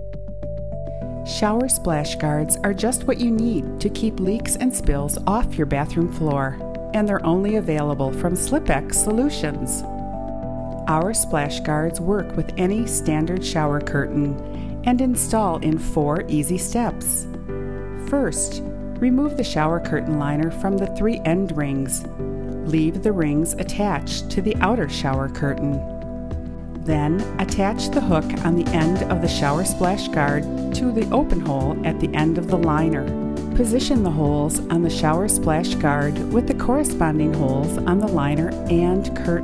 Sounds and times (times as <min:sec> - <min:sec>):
Music: 0:00.0 - 0:39.4
Speech: 0:01.3 - 0:09.8, 0:10.9 - 0:17.3, 0:18.1 - 0:22.0, 0:22.6 - 0:25.8, 0:26.9 - 0:39.4.